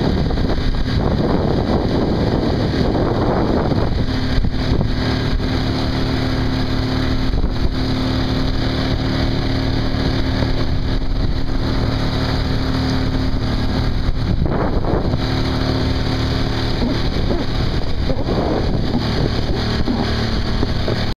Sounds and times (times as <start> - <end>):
Vehicle: 0.0 - 21.1.